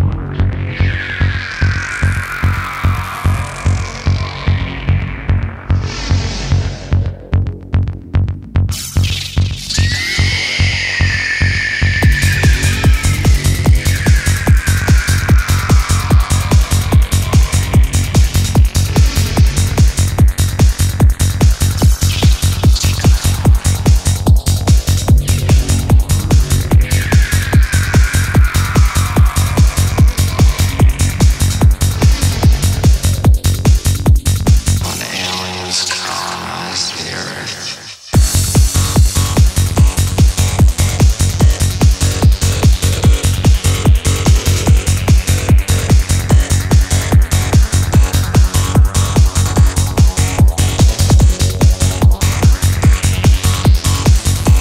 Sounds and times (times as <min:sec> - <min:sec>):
Throbbing: 0:00.0 - 0:37.1, 0:38.2 - 0:54.6
Sampler: 0:11.7 - 0:33.3.